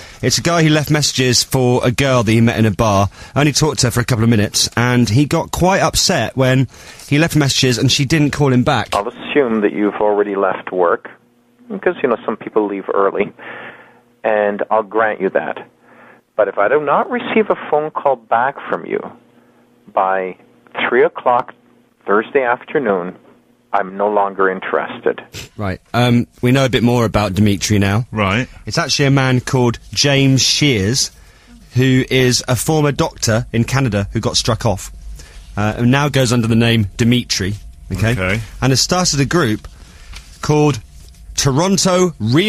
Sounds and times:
Speech: 0:00.0 - 0:13.4, 0:14.2 - 0:15.7, 0:16.4 - 0:19.2, 0:19.9 - 0:34.9, 0:35.6 - 0:39.6, 0:40.4 - 0:40.8, 0:41.4 - 0:42.4.

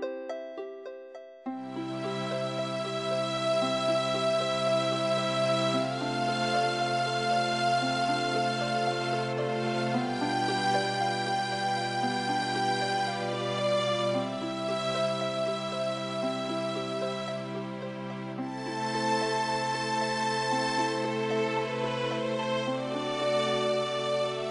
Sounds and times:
New-age music: 0:00.0 - 0:24.5.

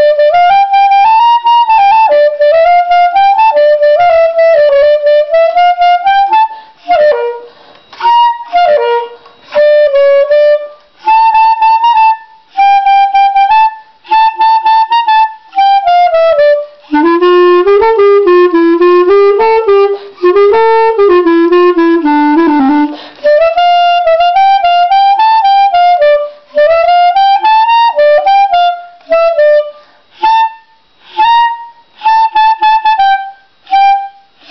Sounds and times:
Whistle: 0:00.0 - 0:20.8, 0:21.5 - 0:34.5.

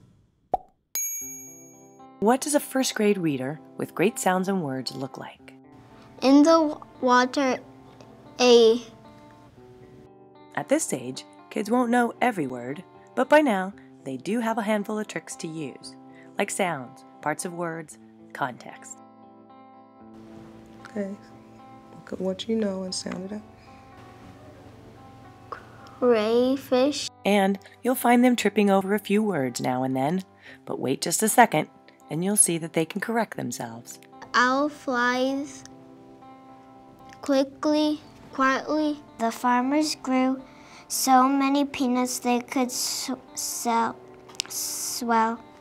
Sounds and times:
Music: 0:01.5 - 0:45.6.

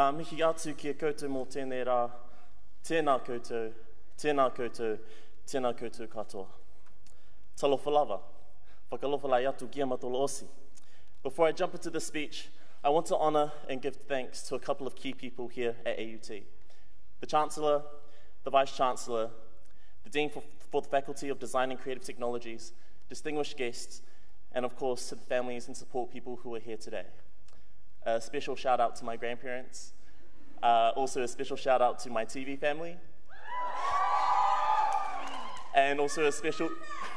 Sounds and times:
Male speech, man speaking: 0:00.0 - 0:02.2, 0:02.8 - 0:06.6, 0:07.6 - 0:08.2, 0:08.9 - 0:10.5, 0:11.3 - 0:16.4, 0:17.2 - 0:17.9, 0:18.5 - 0:19.4, 0:20.1 - 0:27.2, 0:28.0 - 0:29.9, 0:30.6 - 0:33.0, 0:35.7 - 0:36.8
Narration, monologue: 0:00.0 - 0:33.4, 0:35.6 - 0:37.1.

